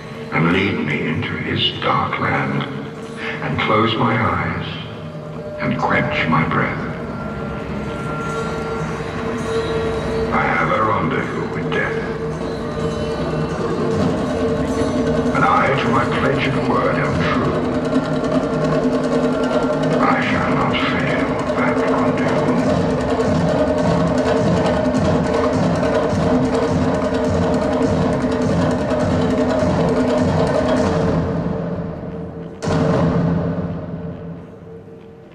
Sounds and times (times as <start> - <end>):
Music: 0.0 - 35.3
Speech: 0.3 - 4.9, 5.6 - 7.0, 10.3 - 12.2, 15.3 - 17.7, 20.0 - 22.8.